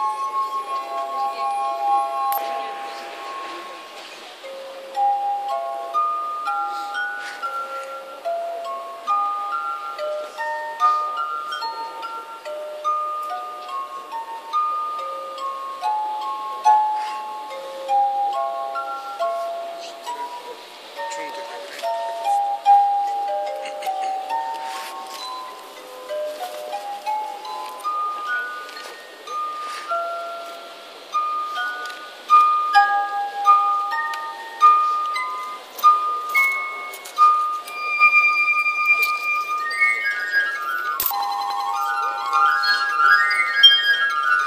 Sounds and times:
Glass: 0.0s - 44.4s
Music: 0.0s - 44.4s.

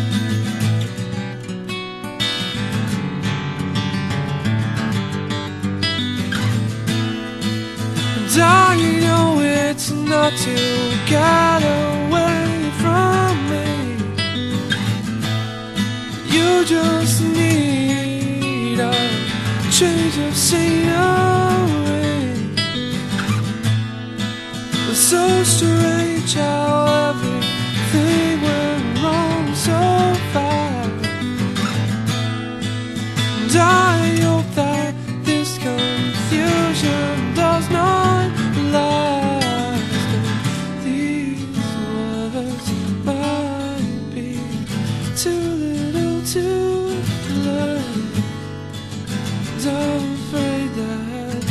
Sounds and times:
Music: 0.0s - 51.5s.

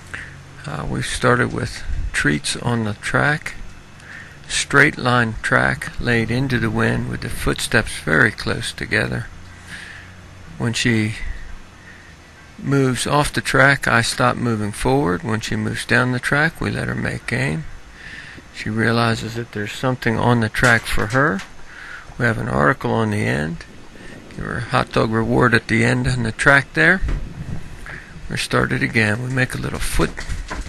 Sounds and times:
Speech: 0.6s - 3.6s, 4.5s - 9.3s, 10.5s - 11.4s, 12.6s - 17.7s, 18.6s - 21.5s, 22.2s - 23.7s, 24.3s - 27.1s, 28.3s - 30.3s.

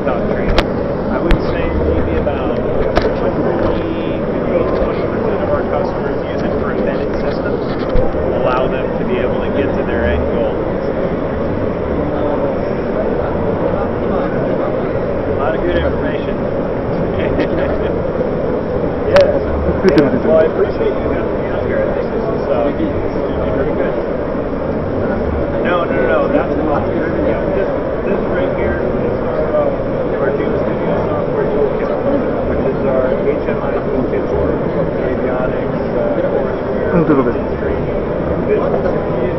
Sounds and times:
Speech: 0.0s - 18.1s, 19.0s - 24.2s, 24.8s - 39.3s.

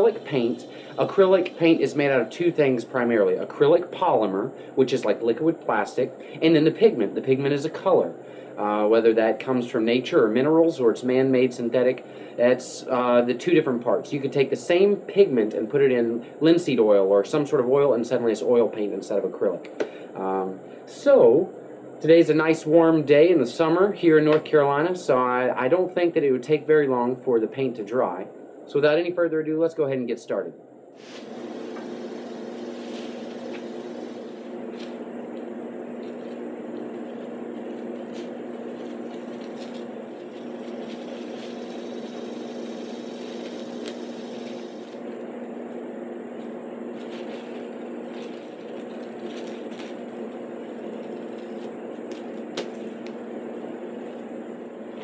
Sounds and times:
Speech: 0.0s - 30.6s.

